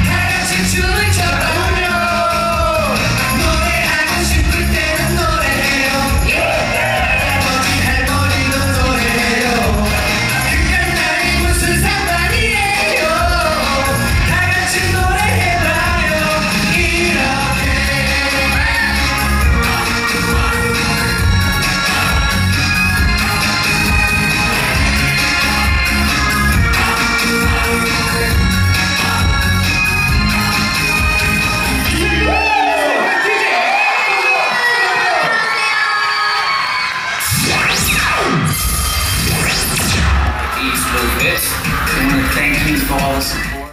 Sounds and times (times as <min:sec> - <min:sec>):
Dance music: 0:00.0 - 0:43.7.